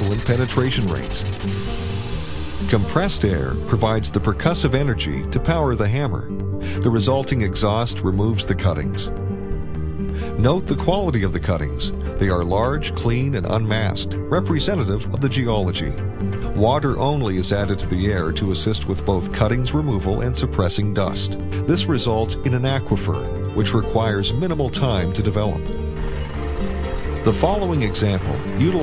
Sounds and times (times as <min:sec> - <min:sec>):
Speech: 0:00.0 - 0:01.3, 0:02.7 - 0:09.1, 0:10.4 - 0:25.7, 0:27.3 - 0:28.8
Music: 0:00.0 - 0:28.8.